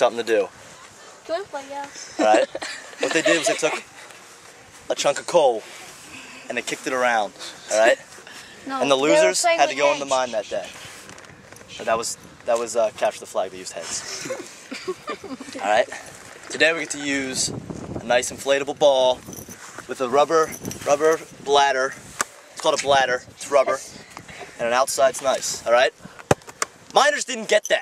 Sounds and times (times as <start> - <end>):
Male speech, man speaking: 0.0 - 0.5, 2.2 - 3.8, 4.9 - 5.6, 6.5 - 8.0, 8.7 - 10.8, 11.7 - 14.1, 15.6 - 19.2, 19.9 - 22.0, 22.6 - 24.0, 24.6 - 26.0, 26.9 - 27.8.